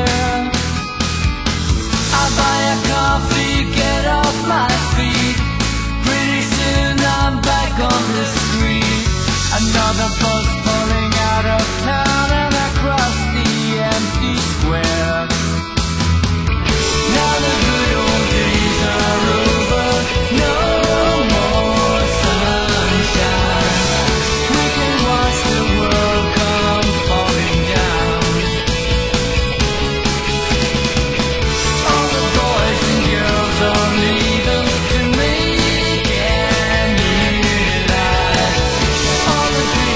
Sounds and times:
Music: 0.0s - 39.9s.

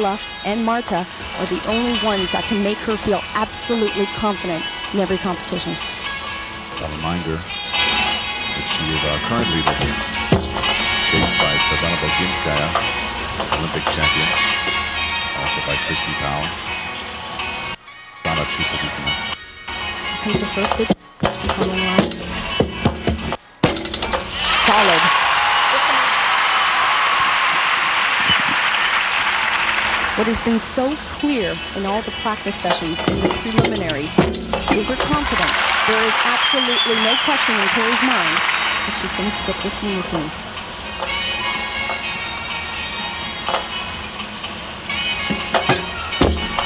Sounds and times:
Speech: 0.0s - 5.8s, 6.8s - 7.4s, 8.6s - 10.0s, 11.1s - 12.8s, 13.6s - 14.4s, 15.4s - 16.5s, 18.3s - 19.2s, 20.2s - 22.1s, 24.4s - 25.1s, 30.2s - 40.4s
Music: 0.0s - 46.6s.

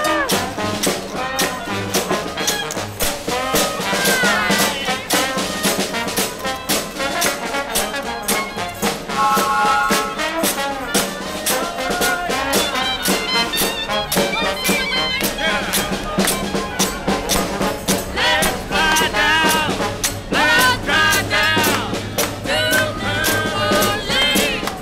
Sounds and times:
Music: 0.0s - 24.8s.

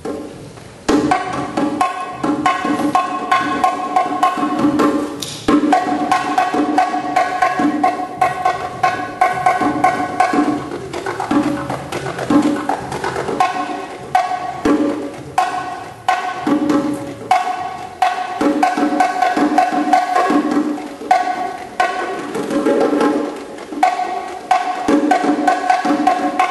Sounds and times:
Percussion: 0.0s - 26.5s.

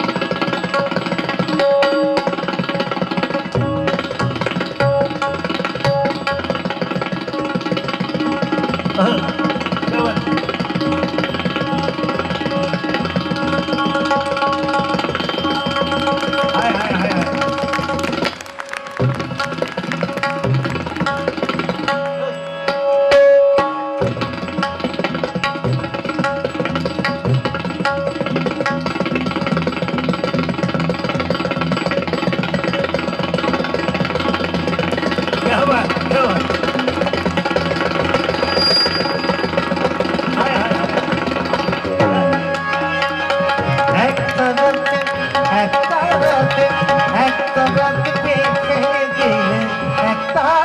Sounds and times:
Tabla: 0.0s - 50.6s.

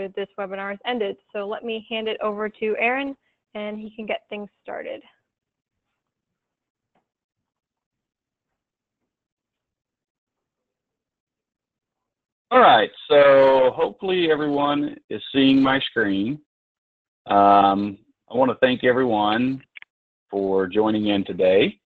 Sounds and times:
Speech: 0.0s - 5.0s, 12.5s - 16.4s, 17.3s - 19.8s, 20.4s - 21.8s.

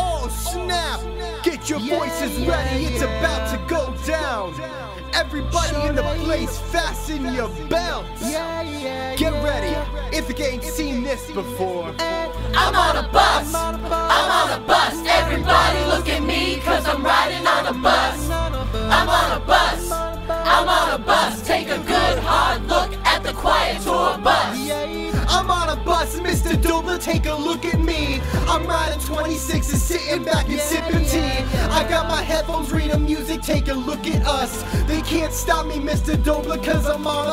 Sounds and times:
Music: 0.0s - 37.3s.

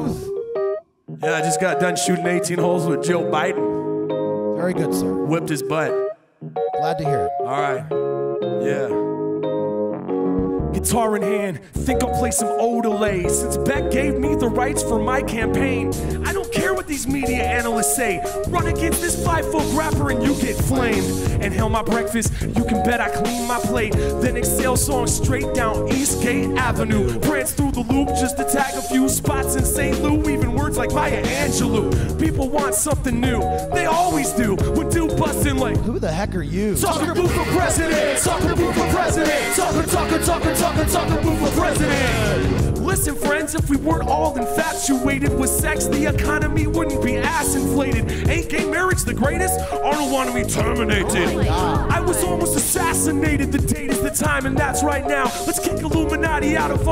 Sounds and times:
Independent music: 0.0s - 56.9s
Jazz: 0.0s - 56.9s.

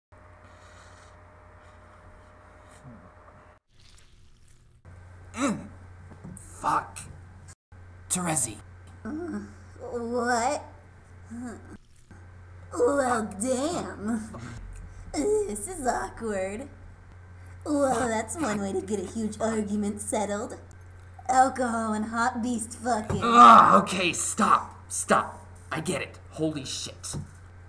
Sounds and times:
Narration, monologue: 3.8s - 27.6s.

